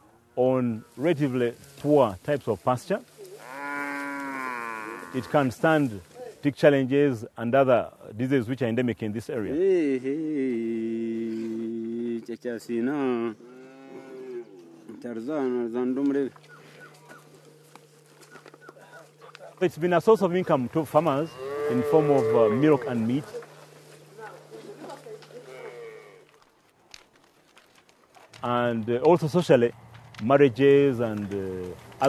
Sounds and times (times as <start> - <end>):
Speech: 0.4 - 3.1, 5.2 - 13.4, 14.9 - 16.3, 18.8 - 23.4, 28.4 - 32.0.